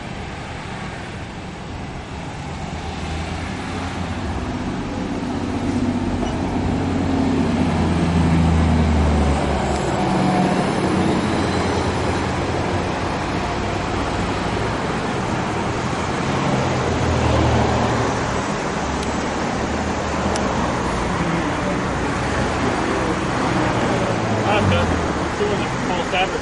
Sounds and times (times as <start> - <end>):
Bus: 0.0 - 26.4.